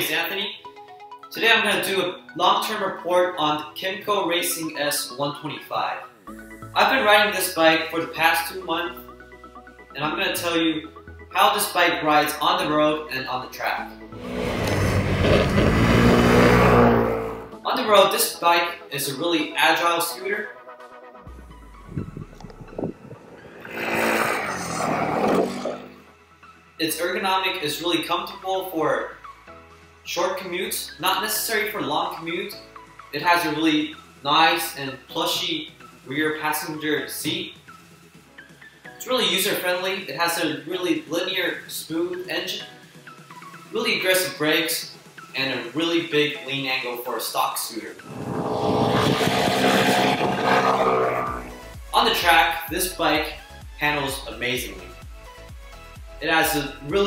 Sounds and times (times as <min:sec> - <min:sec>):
Speech: 0:00.0 - 0:00.6, 0:01.3 - 0:06.0, 0:06.8 - 0:09.0, 0:10.0 - 0:13.9, 0:17.6 - 0:20.5, 0:26.8 - 0:29.2, 0:30.1 - 0:37.6, 0:39.0 - 0:42.7, 0:43.7 - 0:48.0, 0:51.9 - 0:55.0, 0:56.2 - 0:57.0
Music: 0:00.0 - 0:57.0.